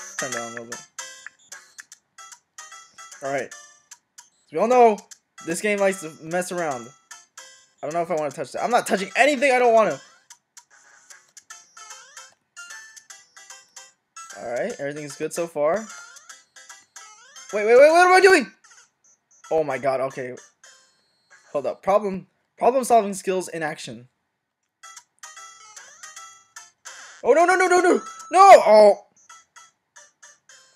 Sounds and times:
Music: 0.0 - 18.2, 24.8 - 28.6
Speech: 0.2 - 0.8, 4.6 - 6.9, 7.9 - 10.0, 14.4 - 15.9, 17.6 - 18.5, 19.5 - 20.4, 21.6 - 24.1, 27.3 - 29.0.

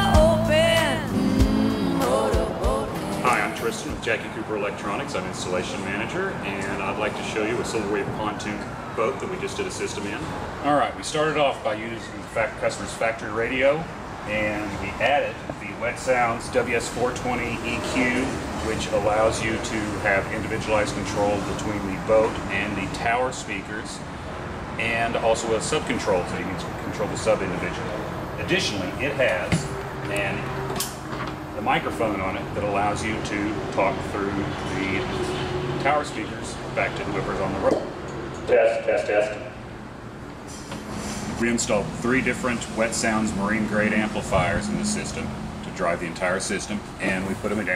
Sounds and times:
Speech: 2.0 - 24.0, 24.8 - 30.5, 31.6 - 35.2, 35.8 - 37.9, 38.5 - 39.5, 41.4 - 47.7.

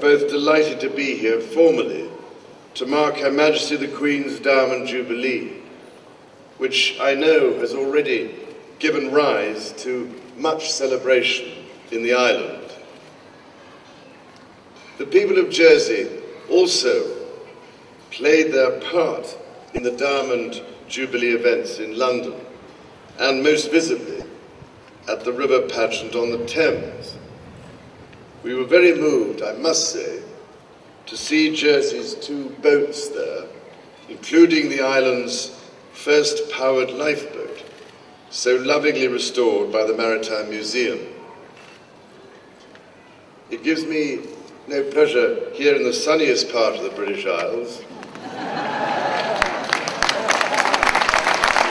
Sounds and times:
Male speech, man speaking: 0.0 - 2.2, 2.8 - 5.6, 6.6 - 12.8, 15.0 - 17.3, 18.1 - 22.5, 23.2 - 24.3, 25.1 - 27.2, 28.5 - 30.4, 31.1 - 37.6, 38.3 - 41.2, 43.5 - 47.9.

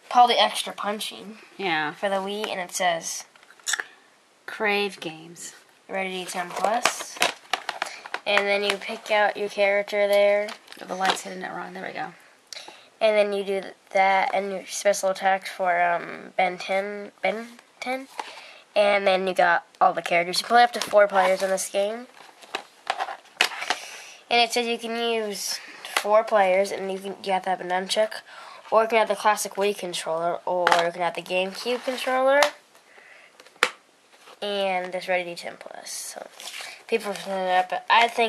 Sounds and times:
Speech: 0.1 - 3.3, 4.5 - 7.3, 8.2 - 12.2, 13.0 - 18.1, 18.8 - 22.1, 24.3 - 32.6, 34.4 - 38.2.

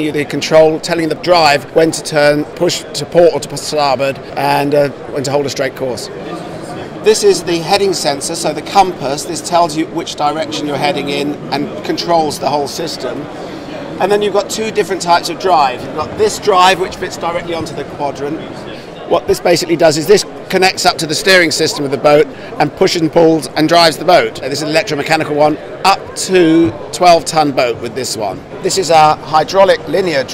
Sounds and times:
Speech: 0.0 - 13.3, 14.0 - 30.3.

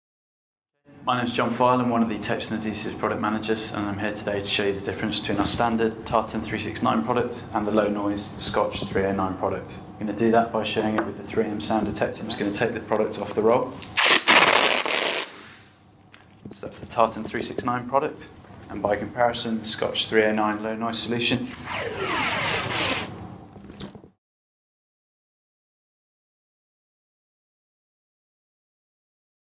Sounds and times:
Speech: 0.9 - 13.8, 16.5 - 21.5.

